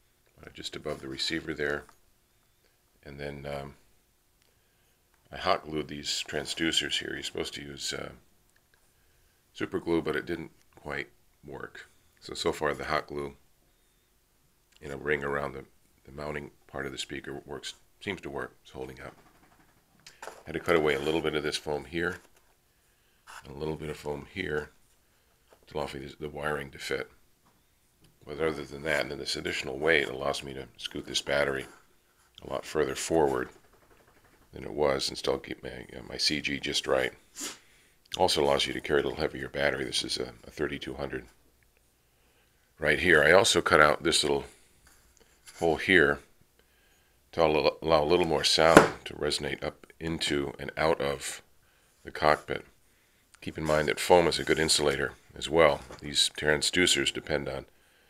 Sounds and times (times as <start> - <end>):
Speech: 0.4 - 2.0, 3.0 - 3.8, 5.3 - 8.2, 9.6 - 13.4, 14.8 - 19.2, 20.4 - 22.3, 23.4 - 24.8, 25.7 - 27.2, 28.2 - 31.8, 32.4 - 33.6, 34.5 - 37.2, 38.1 - 41.4, 42.8 - 44.6, 45.5 - 46.3, 47.3 - 52.7, 53.4 - 57.7.